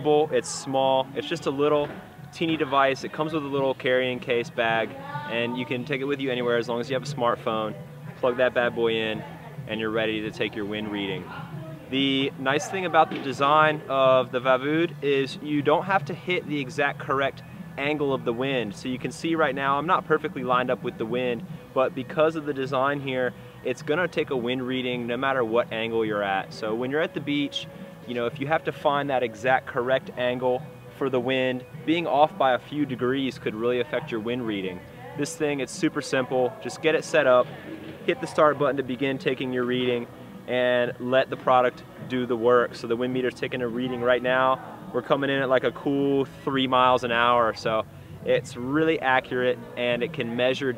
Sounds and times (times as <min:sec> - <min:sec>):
Music: 0:00.0 - 0:50.7
Speech: 0:00.0 - 0:50.7.